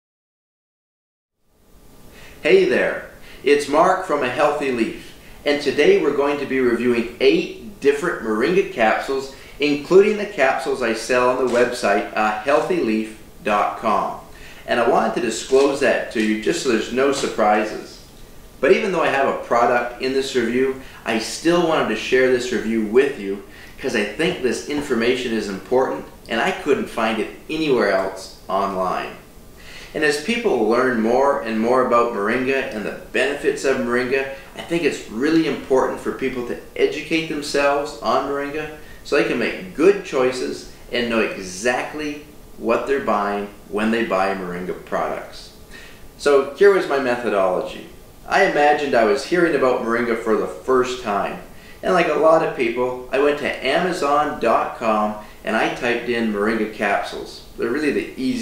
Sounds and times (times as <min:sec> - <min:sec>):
Speech: 0:02.4 - 0:29.2, 0:29.9 - 0:45.6, 0:46.2 - 0:58.4.